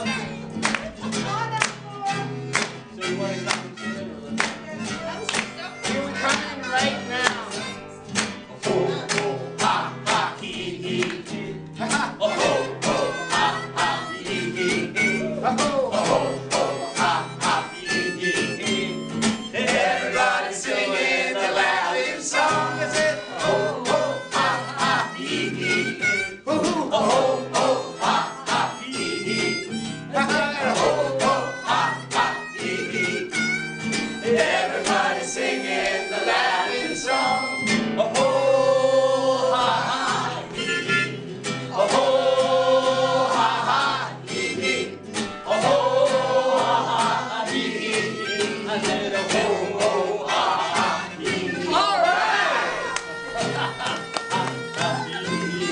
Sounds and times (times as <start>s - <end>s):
Music: 0.0s - 55.7s.